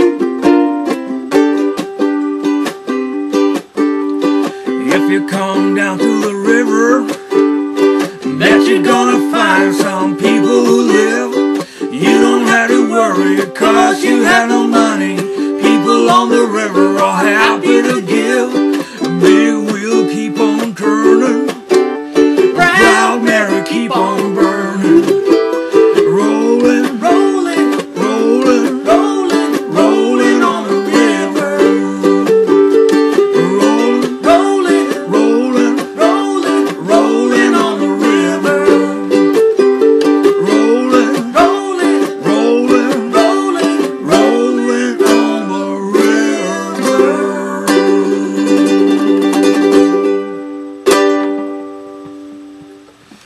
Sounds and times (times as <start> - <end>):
Guitar: 0.0 - 53.2
Ukulele: 0.0 - 53.2
Singing: 4.8 - 7.2, 8.2 - 21.6, 22.5 - 25.4, 26.0 - 32.6, 33.2 - 39.4, 40.2 - 49.1.